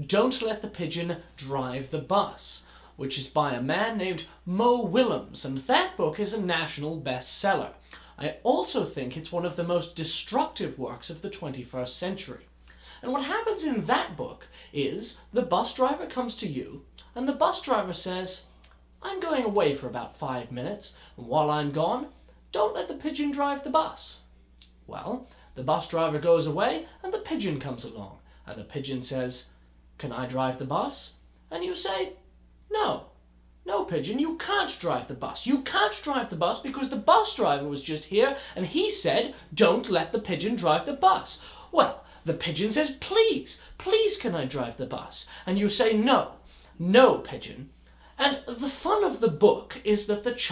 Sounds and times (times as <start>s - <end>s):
Speech: 0.0s - 24.3s, 24.9s - 50.5s.